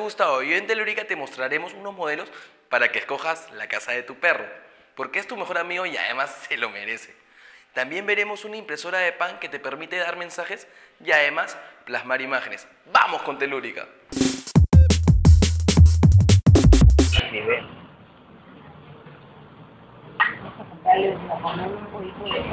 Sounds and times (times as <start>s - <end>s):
Speech: 0.0s - 7.2s, 7.8s - 14.0s, 20.6s - 22.5s.